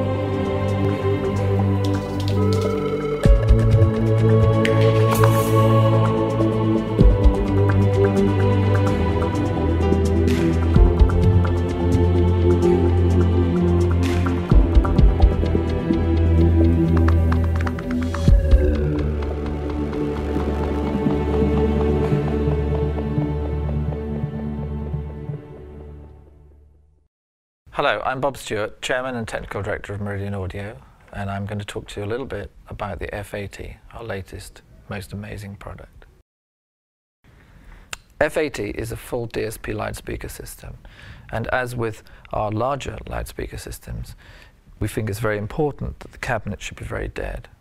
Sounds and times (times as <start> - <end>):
Speech: 27.7 - 36.0, 38.2 - 44.2, 44.8 - 47.6.